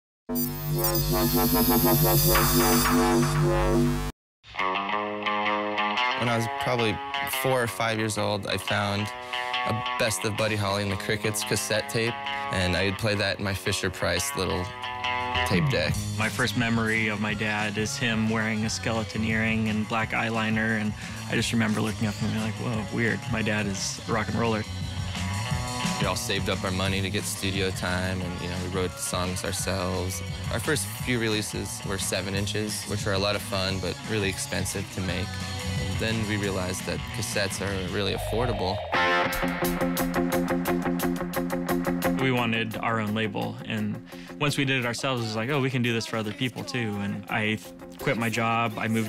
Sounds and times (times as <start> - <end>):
Music: 0.3 - 49.0
Speech: 6.2 - 14.7, 15.4 - 24.7, 26.0 - 35.4, 36.0 - 38.8, 42.1 - 49.0.